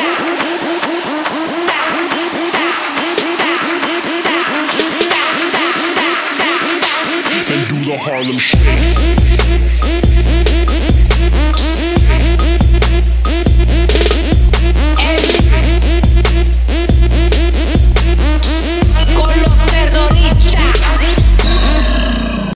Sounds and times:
Music: 0:00.0 - 0:22.2.

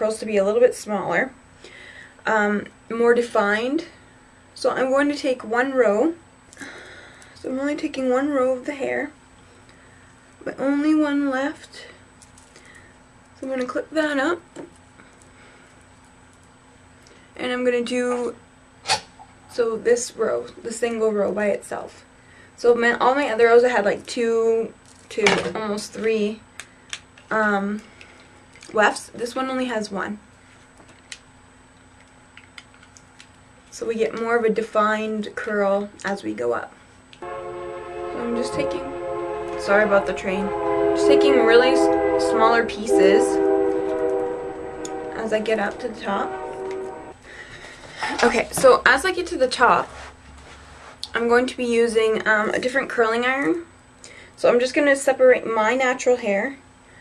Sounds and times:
Train horn: 0:37.2 - 0:47.2.

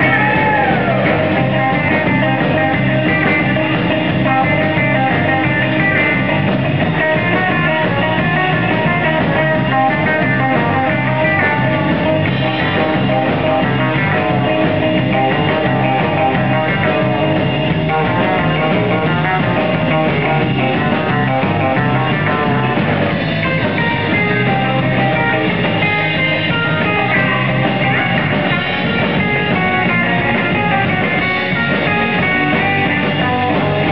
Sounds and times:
Music: 0:00.0 - 0:33.9.

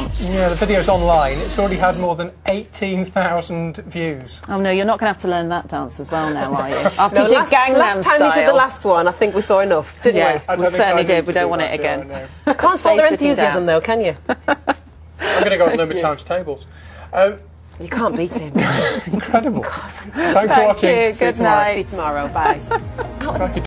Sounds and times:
Music: 0:00.0 - 0:02.1, 0:21.1 - 0:23.6.

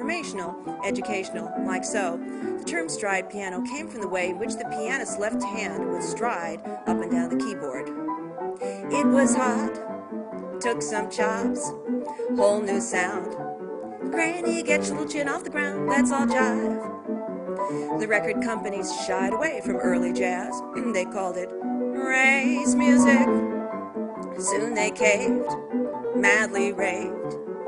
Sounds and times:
Speech: 0:00.0 - 0:08.0, 0:08.7 - 0:09.8, 0:10.6 - 0:11.7, 0:12.3 - 0:13.4, 0:14.2 - 0:16.8, 0:17.7 - 0:23.4, 0:24.4 - 0:25.5, 0:26.2 - 0:27.2
Music: 0:00.0 - 0:27.6.

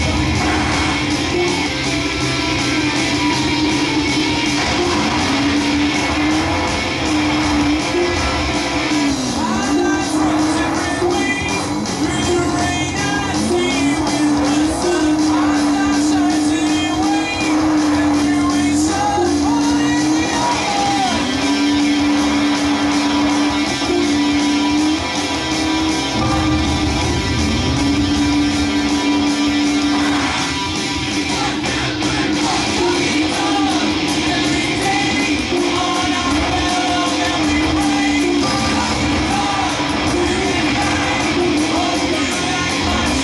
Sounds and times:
Car: 0:00.0 - 0:43.2
Music: 0:00.0 - 0:43.2.

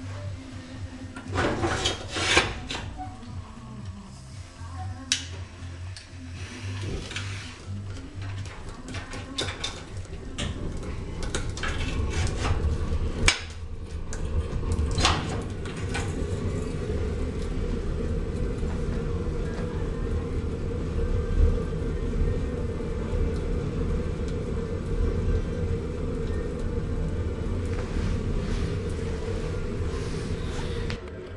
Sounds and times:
Music: 0:00.0 - 0:31.3.

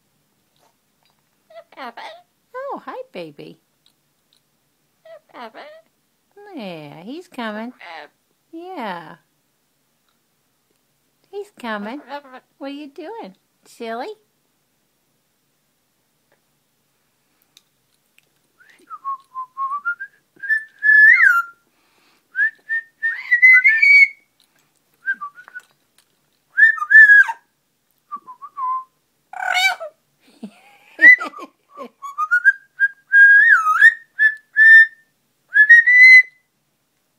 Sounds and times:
Whistling: 0:18.6 - 0:21.6, 0:22.4 - 0:24.2, 0:25.0 - 0:25.7, 0:26.6 - 0:27.4, 0:28.1 - 0:29.0, 0:32.0 - 0:36.5.

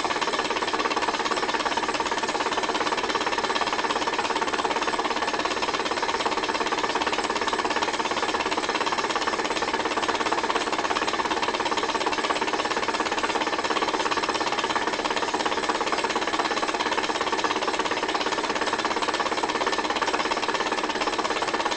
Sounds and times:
Engine: 0:00.0 - 0:21.7.

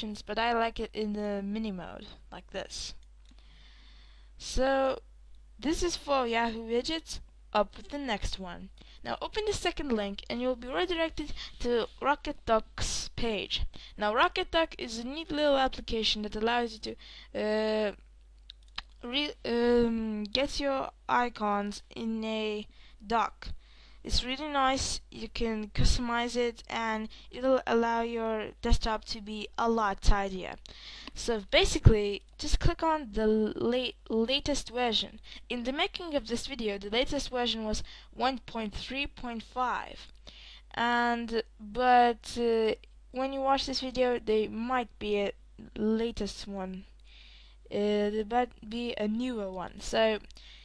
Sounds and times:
Narration, monologue: 0:00.0 - 0:50.6.

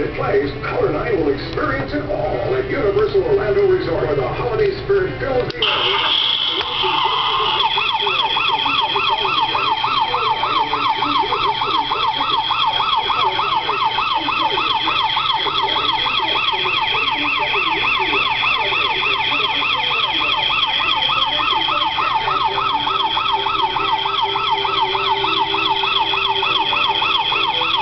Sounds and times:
Speech: 0:00.0 - 0:27.7
Siren: 0:05.6 - 0:27.8.

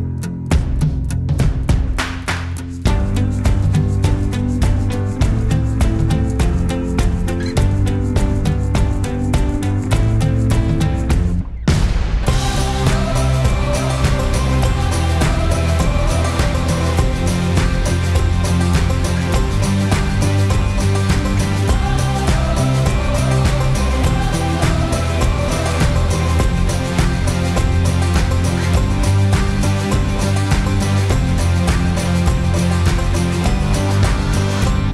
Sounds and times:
Background music: 0:00.0 - 0:34.9
Exciting music: 0:02.9 - 0:34.9.

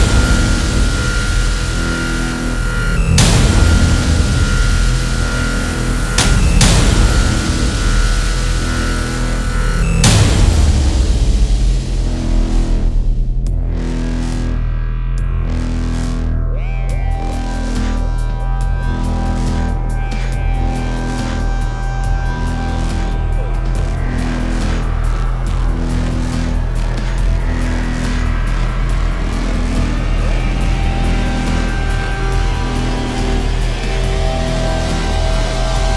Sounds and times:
Music: 0:00.0 - 0:35.9.

